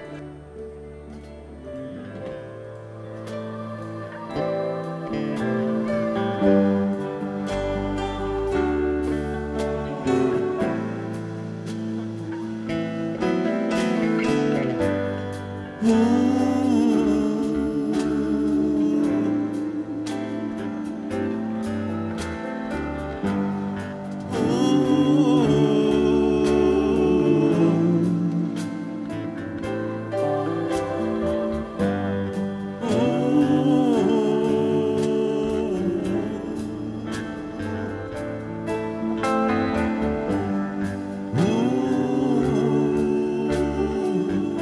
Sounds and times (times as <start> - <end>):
Music: 0.0 - 44.6.